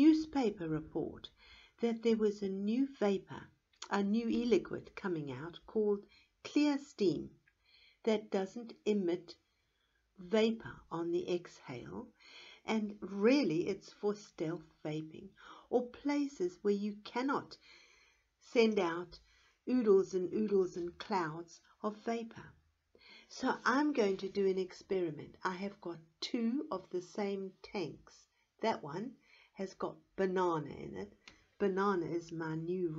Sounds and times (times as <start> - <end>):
Speech: 0.0 - 7.4, 8.1 - 9.4, 10.2 - 12.1, 12.7 - 17.6, 18.4 - 22.5, 23.3 - 32.9.